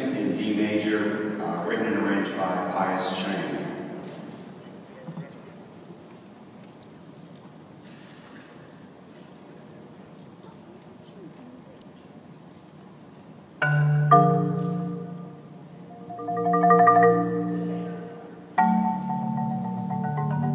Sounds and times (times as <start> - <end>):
Speech: 0.0 - 5.7.